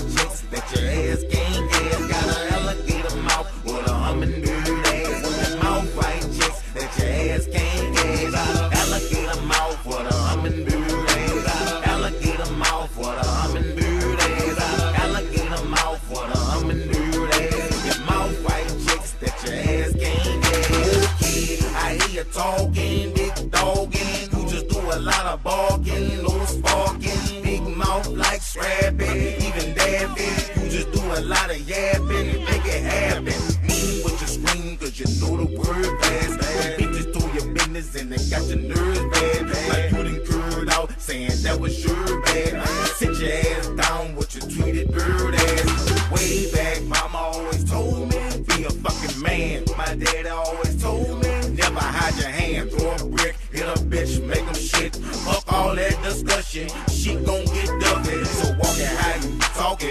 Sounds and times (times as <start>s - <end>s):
Music: 0.0s - 59.9s.